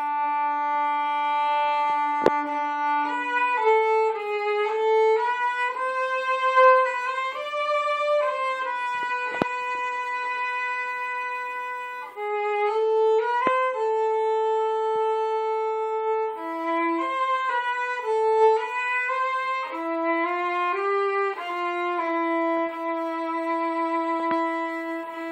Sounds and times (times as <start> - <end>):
Violin, fiddle: 0.0 - 25.3.